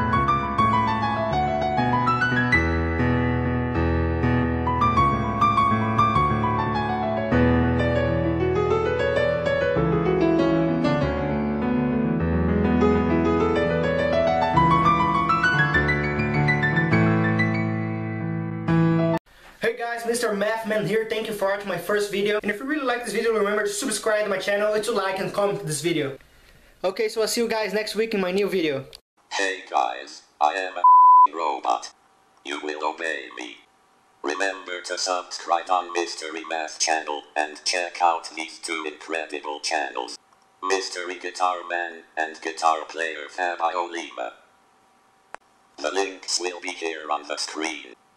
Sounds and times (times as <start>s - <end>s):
Speech: 19.6s - 26.2s, 26.8s - 33.6s, 34.3s - 44.4s, 45.8s - 48.0s.